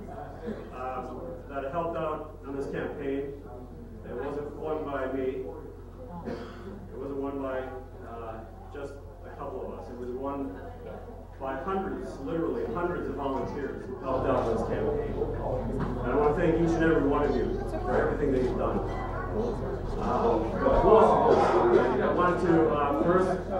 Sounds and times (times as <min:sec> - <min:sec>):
Male speech, man speaking: 0:00.0 - 0:05.8, 0:06.9 - 0:18.9, 0:19.9 - 0:23.6.